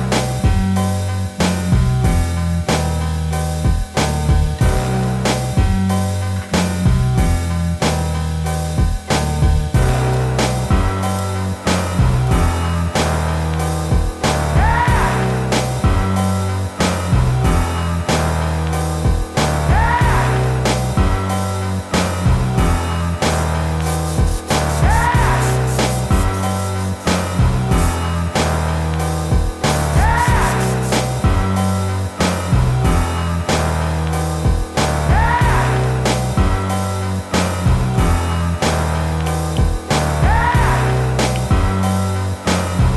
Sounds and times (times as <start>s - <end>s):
Drum kit: 0.0s - 42.9s
Drum: 1.4s - 3.0s, 3.7s - 5.9s, 6.6s - 8.2s, 8.8s - 11.1s, 11.7s - 21.4s, 22.0s - 36.8s, 37.4s - 42.9s.